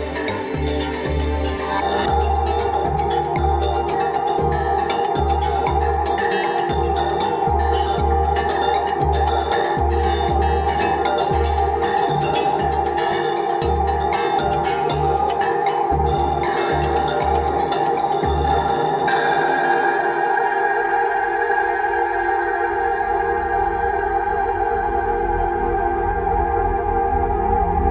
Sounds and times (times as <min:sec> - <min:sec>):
Percussion: 0:00.0 - 0:19.5.